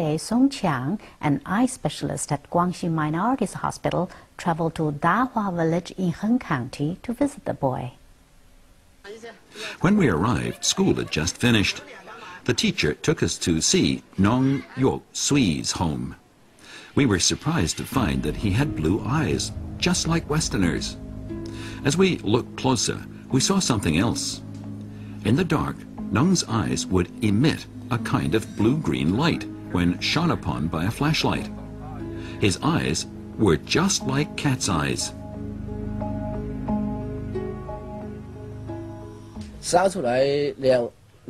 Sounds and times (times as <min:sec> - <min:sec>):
Speech: 0:09.1 - 0:16.2, 0:17.0 - 0:21.0, 0:21.8 - 0:24.4, 0:25.3 - 0:35.2, 0:39.6 - 0:41.2
Music: 0:09.6 - 0:13.0, 0:17.0 - 0:40.3.